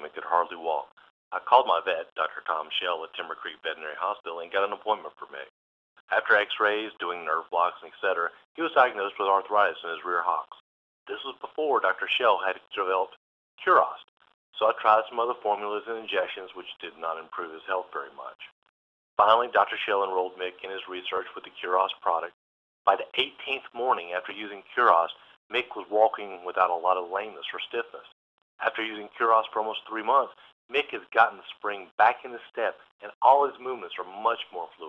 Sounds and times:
Speech: 0.0s - 5.5s, 6.1s - 18.6s, 19.2s - 34.8s.

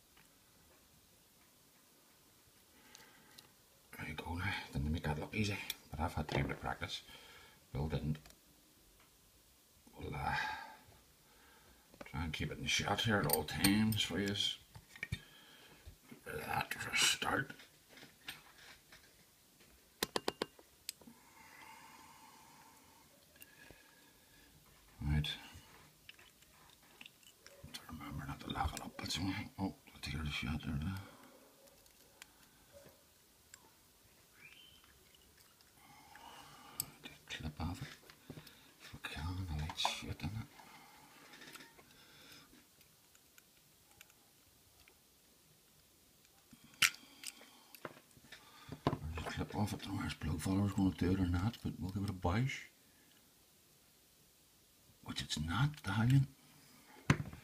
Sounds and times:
Speech: 3.9s - 7.1s, 7.7s - 8.3s, 9.9s - 10.7s, 12.1s - 14.6s, 16.2s - 17.6s, 25.0s - 25.5s, 27.8s - 31.1s, 37.3s - 37.9s, 38.9s - 40.5s, 49.0s - 52.7s, 55.0s - 56.4s.

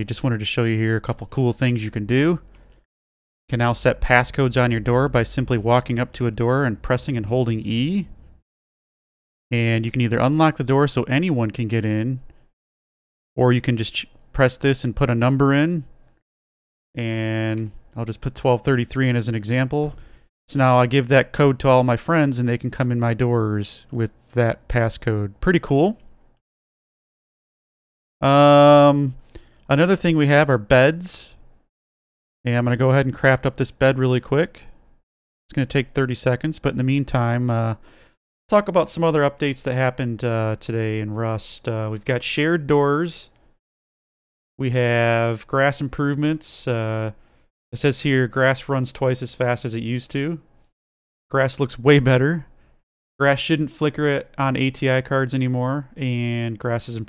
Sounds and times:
Speech: 0.0s - 2.5s, 3.5s - 8.2s, 9.5s - 12.3s, 13.4s - 15.9s, 17.0s - 26.1s, 28.2s - 31.4s, 32.5s - 34.8s, 35.5s - 37.8s, 38.5s - 43.4s, 44.6s - 47.2s, 47.8s - 50.5s, 51.3s - 52.5s, 53.2s - 57.0s.

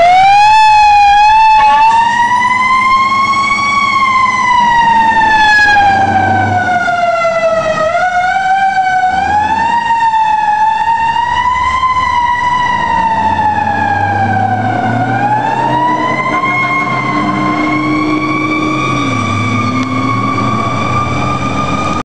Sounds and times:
Fire engine, fire truck (siren): 0.0s - 22.0s
Car: 2.9s - 22.0s.

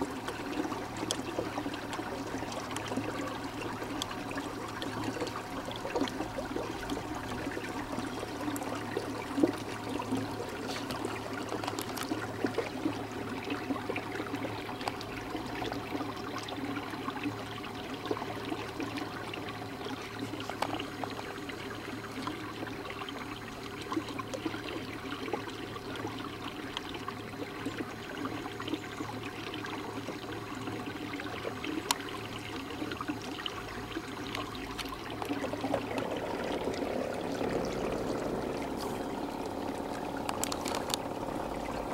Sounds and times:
Boat, Water vehicle: 0.0s - 41.9s.

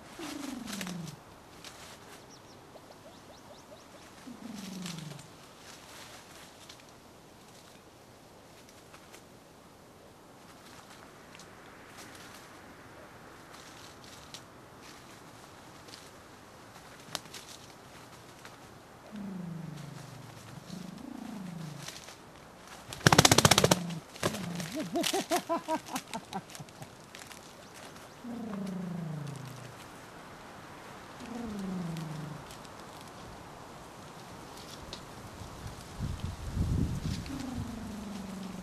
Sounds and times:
Outside, rural or natural: 0.0s - 38.6s.

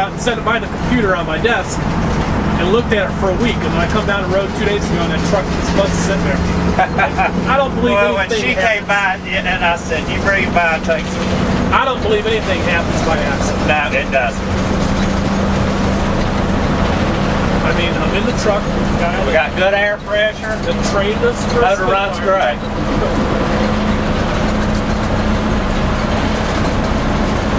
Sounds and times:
Speech: 0.0s - 1.8s, 2.6s - 14.4s, 17.6s - 23.1s
Bus: 0.0s - 27.5s.

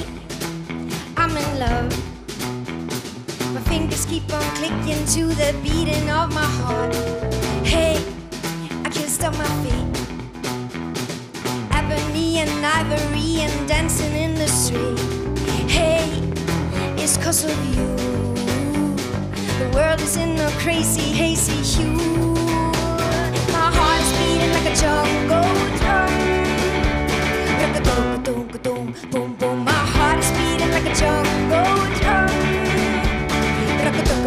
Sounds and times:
Psychedelic rock: 0.0s - 34.2s.

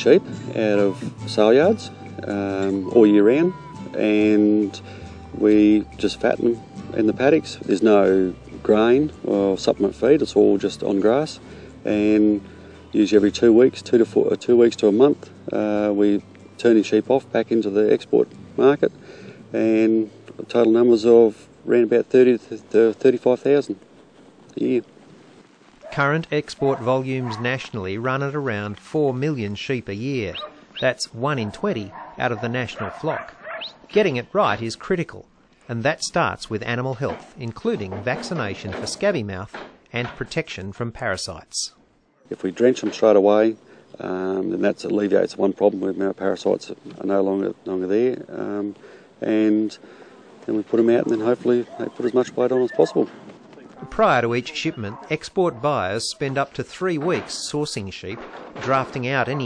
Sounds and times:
Speech: 0.0s - 4.8s, 5.4s - 12.4s, 13.0s - 18.9s, 19.5s - 23.8s, 24.5s - 24.9s, 25.9s - 33.3s, 33.9s - 49.8s, 50.5s - 53.1s, 53.7s - 59.4s
Music: 0.0s - 21.9s.

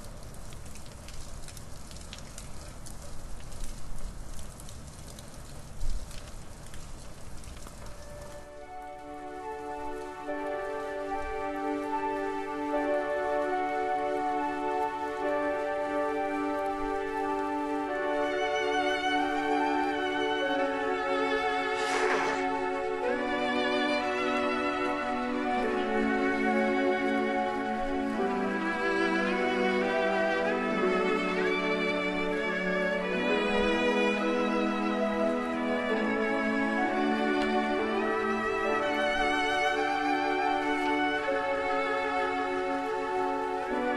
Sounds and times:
Music: 7.7s - 43.9s.

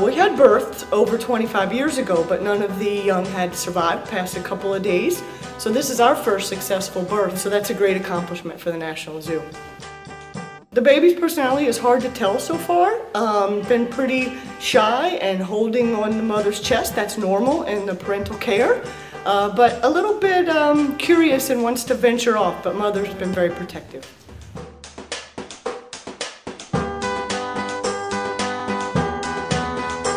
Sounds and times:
Speech: 0.0s - 9.6s, 10.8s - 24.1s.

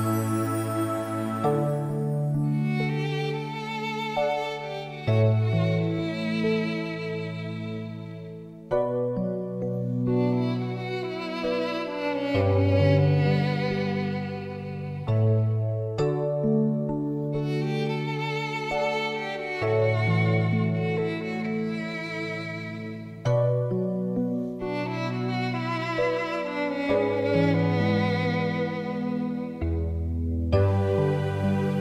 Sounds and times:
Violin, fiddle: 0.0s - 8.7s, 10.0s - 16.2s, 17.3s - 23.8s, 24.6s - 31.8s.

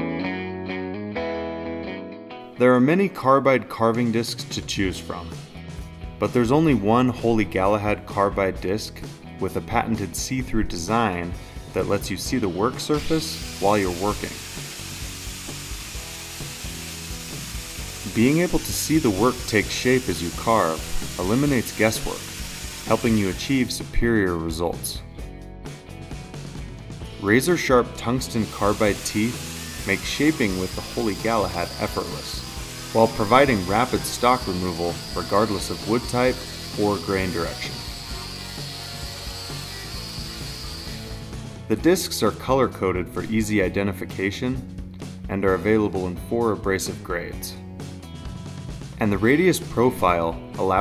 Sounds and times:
Power tool: 12.2s - 24.0s, 27.4s - 41.6s.

